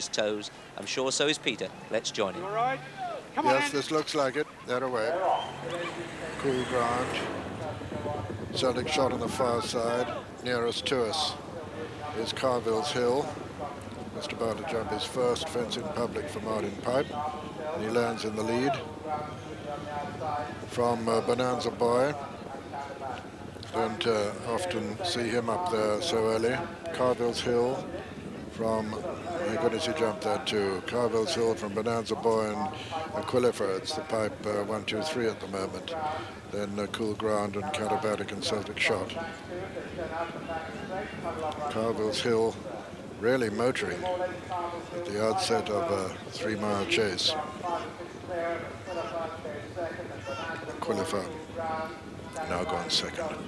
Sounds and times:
Speech: 0.0s - 53.4s
Clip-clop: 4.8s - 53.4s.

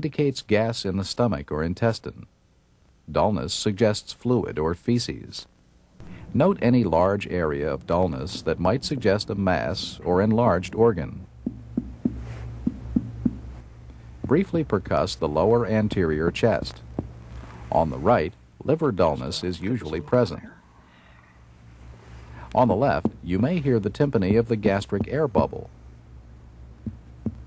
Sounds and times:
Speech: 0.0s - 2.3s, 3.1s - 5.5s, 6.4s - 11.3s, 14.3s - 16.8s, 17.7s - 20.6s, 22.6s - 25.7s.

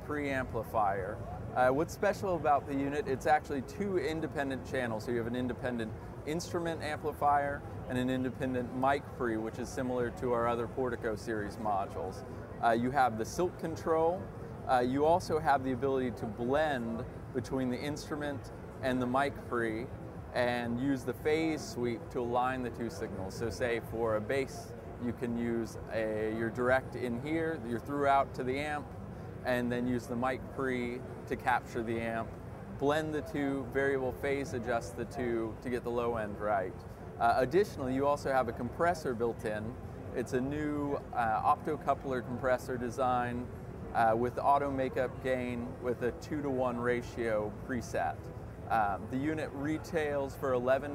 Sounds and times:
Speech: 0.0s - 50.9s.

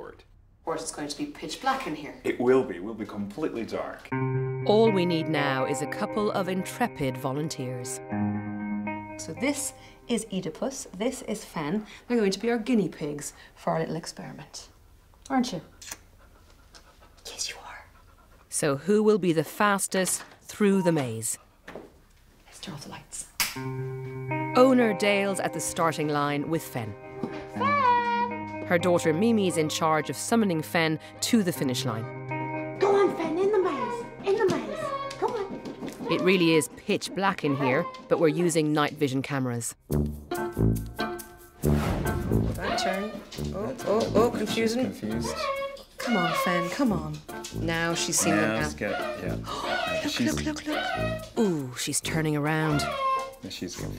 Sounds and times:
Pant: 15.6s - 18.6s.

